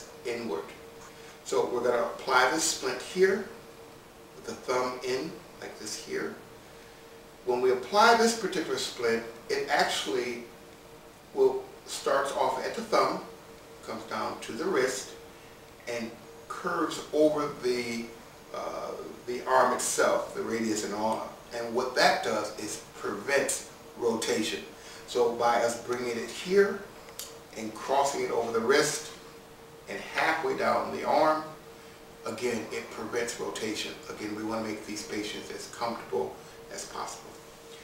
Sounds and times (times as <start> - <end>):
Speech: 0.0 - 0.8, 1.4 - 3.6, 4.4 - 6.4, 7.5 - 10.5, 11.3 - 15.2, 15.8 - 26.9, 27.5 - 29.2, 29.9 - 31.6, 32.2 - 37.8.